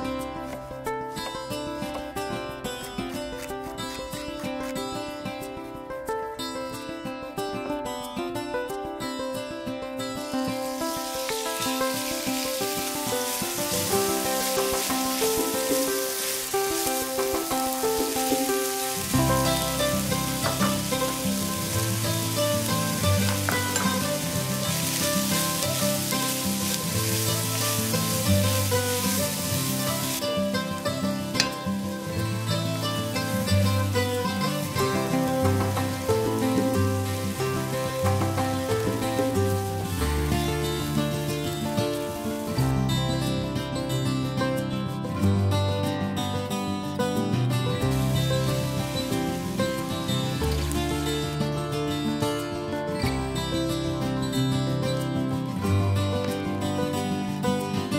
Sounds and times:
Music: 0.0s - 57.9s.

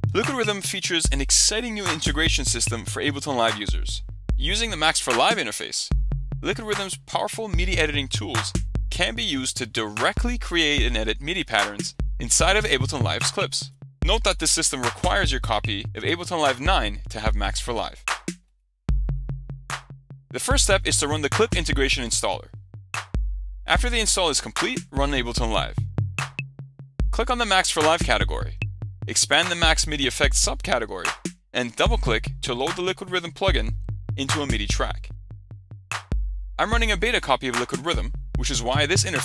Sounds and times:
Music: 0.0s - 39.2s
Speech: 0.1s - 18.0s, 20.4s - 22.5s, 23.7s - 25.8s, 27.2s - 35.1s, 36.6s - 39.2s.

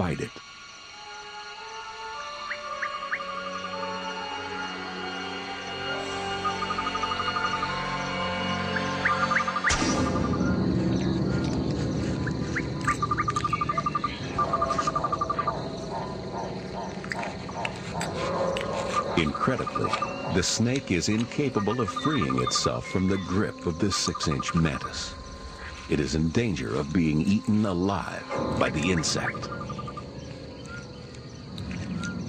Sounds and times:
Speech: 0.0s - 0.4s, 19.2s - 25.2s, 25.9s - 29.5s.

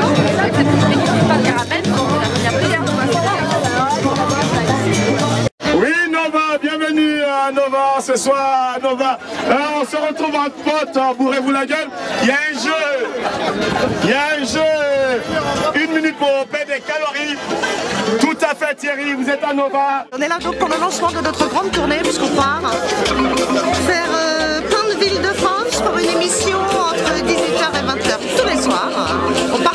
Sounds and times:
Music: 0.0s - 5.5s, 20.2s - 29.7s.

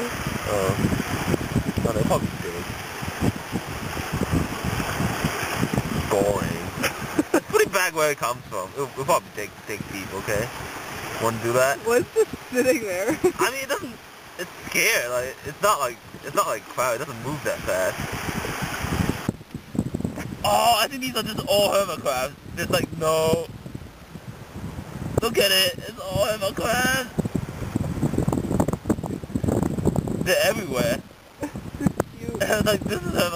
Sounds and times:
Stream: 0.0s - 33.3s.

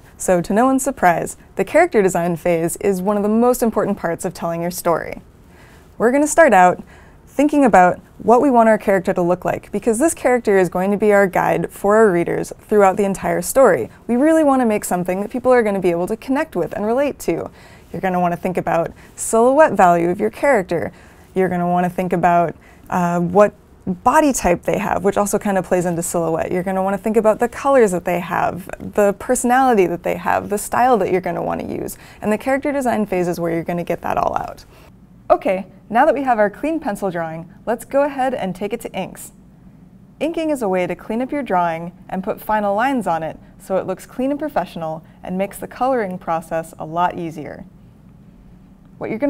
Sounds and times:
Speech: 0.2s - 5.2s, 6.0s - 34.7s, 35.3s - 39.4s, 40.2s - 47.7s, 49.0s - 49.3s.

